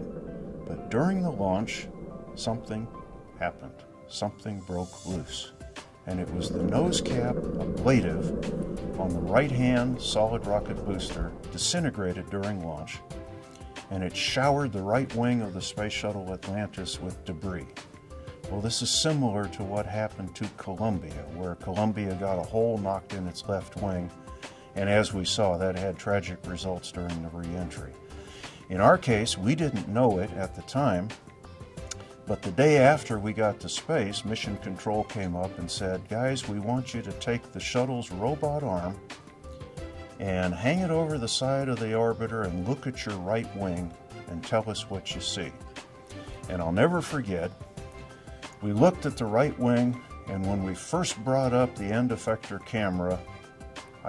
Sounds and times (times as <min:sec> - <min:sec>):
Music: 0:00.0 - 0:54.0
Speech: 0:00.7 - 0:08.3, 0:08.9 - 0:13.0, 0:13.9 - 0:17.8, 0:18.5 - 0:24.2, 0:24.8 - 0:28.0, 0:28.7 - 0:31.2, 0:32.3 - 0:39.0, 0:40.2 - 0:45.6, 0:46.5 - 0:47.6, 0:48.6 - 0:53.3.